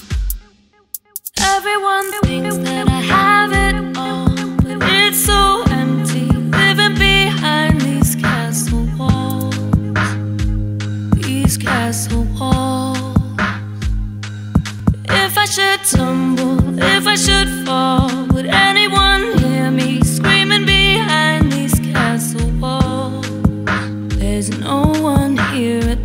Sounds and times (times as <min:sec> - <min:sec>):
Dubstep: 0:01.0 - 0:26.0.